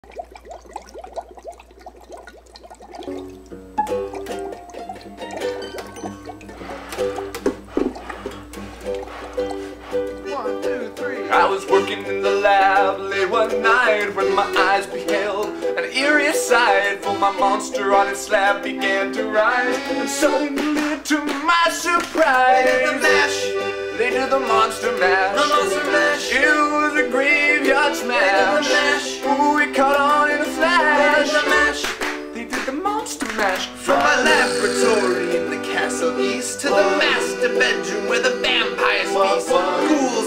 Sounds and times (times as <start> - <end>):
Ukulele: 3.1 - 40.2
Accordion: 7.8 - 15.8, 16.4 - 21.0, 22.2 - 32.4, 33.8 - 40.2.